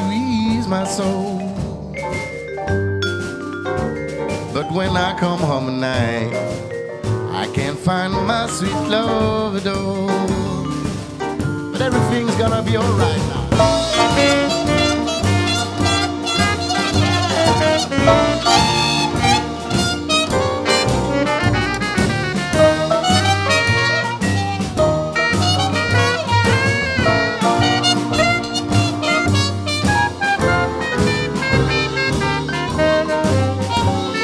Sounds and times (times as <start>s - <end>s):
Musical instrument: 0.0s - 34.2s
Swing music: 0.0s - 34.2s.